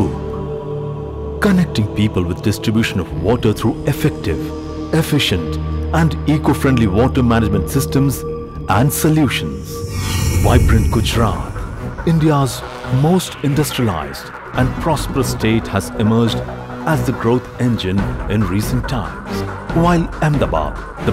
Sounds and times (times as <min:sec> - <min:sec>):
Music: 0:00.0 - 0:21.1
Speech: 0:01.4 - 0:21.1.